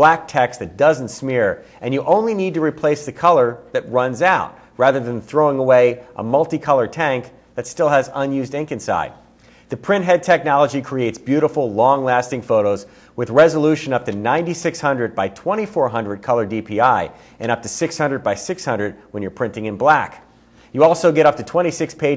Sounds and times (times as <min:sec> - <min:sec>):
Speech: 0:00.0 - 0:22.1.